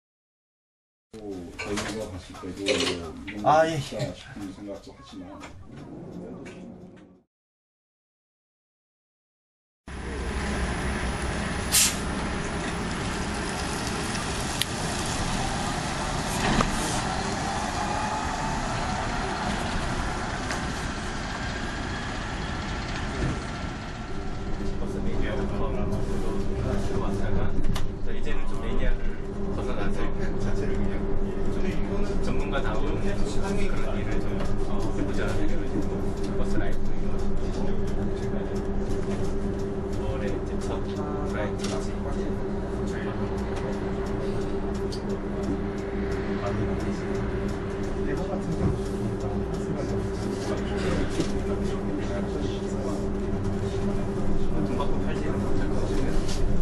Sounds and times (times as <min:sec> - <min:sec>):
Speech: 0:01.2 - 0:05.6, 0:24.7 - 0:39.2, 0:39.9 - 0:44.4, 0:46.3 - 0:47.2, 0:47.8 - 0:56.6
Bus: 0:09.9 - 0:56.6.